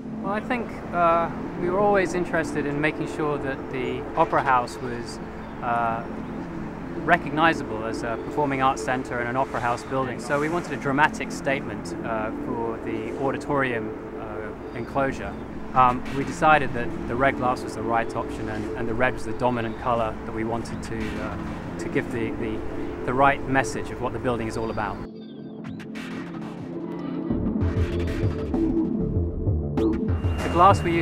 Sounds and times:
Music: 0.0s - 31.0s
Speech: 0.3s - 6.1s, 7.1s - 25.1s, 30.4s - 31.0s.

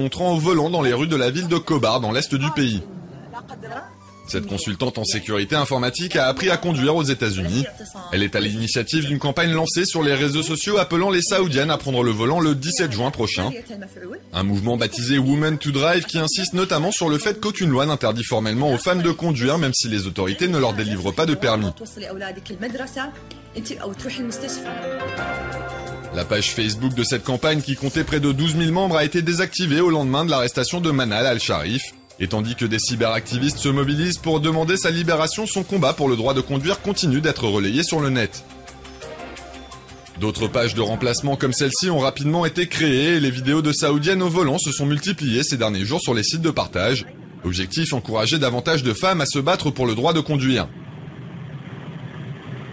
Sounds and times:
Speech: 0.0s - 24.7s, 26.2s - 38.4s, 40.2s - 50.7s
Music: 0.0s - 50.7s.

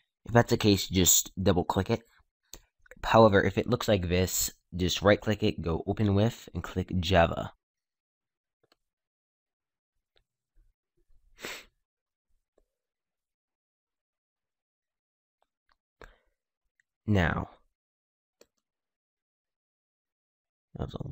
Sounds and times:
Speech: 0.3s - 2.0s, 3.0s - 7.6s, 17.1s - 17.6s, 20.8s - 21.1s.

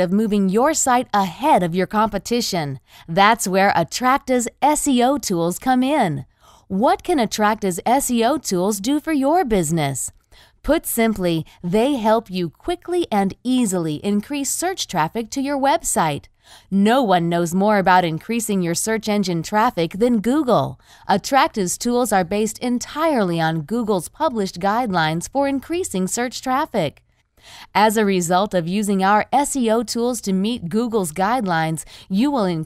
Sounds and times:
Speech: 0.0s - 27.0s, 27.8s - 32.6s.

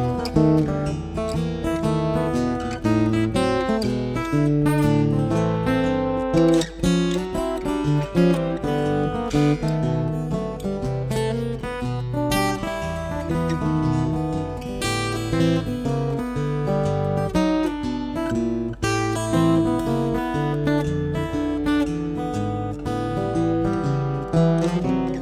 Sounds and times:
Acoustic guitar: 0.0s - 25.2s.

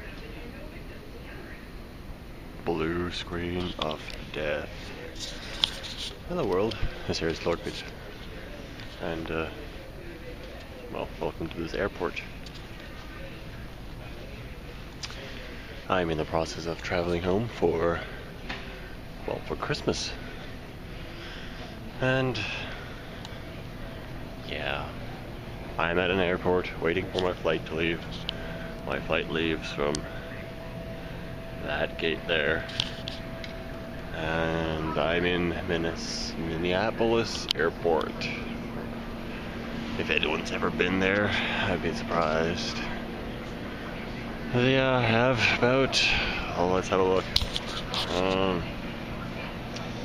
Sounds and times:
Speech: 2.6s - 18.2s, 19.2s - 20.4s, 22.0s - 23.5s, 24.4s - 25.2s, 25.8s - 28.2s, 28.8s - 30.7s, 31.6s - 32.7s, 34.1s - 38.6s, 39.9s - 43.2s, 43.8s - 50.0s.

